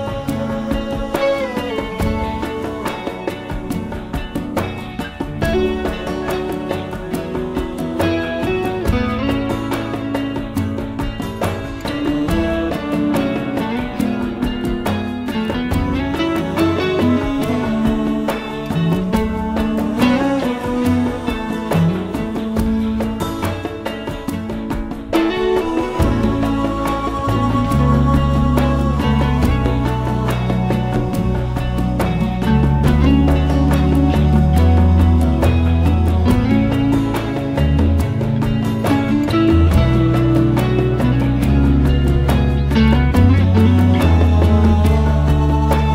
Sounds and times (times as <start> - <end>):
Music: 0.0 - 45.9.